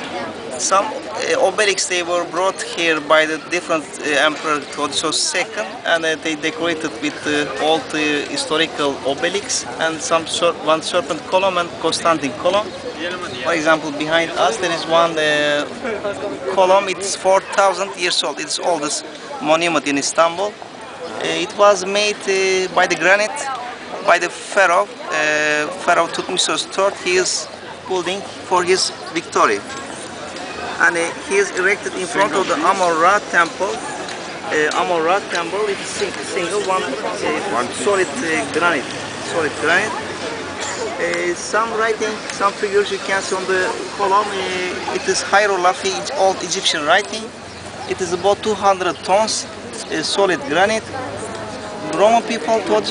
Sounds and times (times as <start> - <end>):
Speech: 0.0 - 29.6.